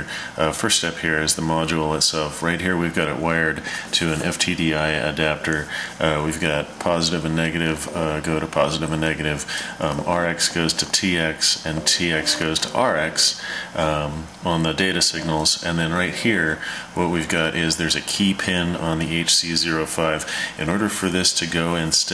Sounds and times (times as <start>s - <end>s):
Speech: 0.0s - 22.1s.